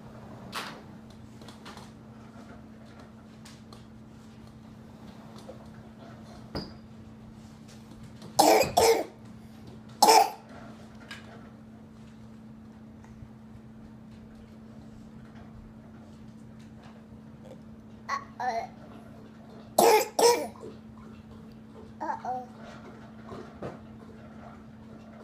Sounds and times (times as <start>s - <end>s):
Cough: 8.4s - 9.2s, 10.0s - 10.5s, 19.8s - 20.8s
Babbling: 17.5s - 18.8s, 22.0s - 22.6s.